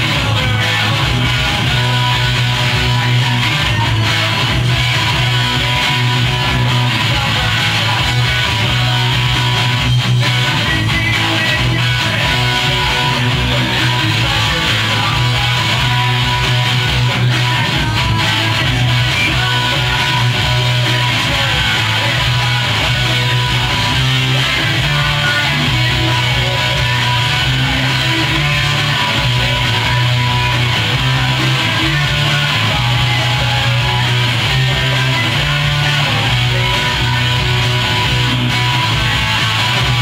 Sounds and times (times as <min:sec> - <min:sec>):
Electric guitar: 0:00.0 - 0:40.0.